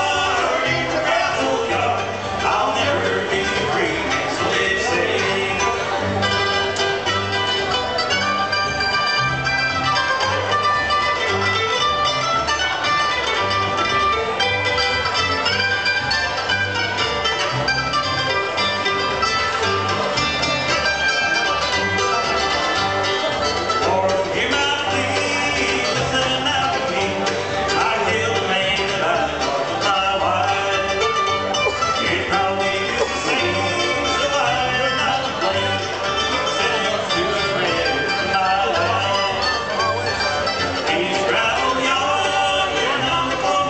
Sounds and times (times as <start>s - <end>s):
Country: 0.0s - 43.6s.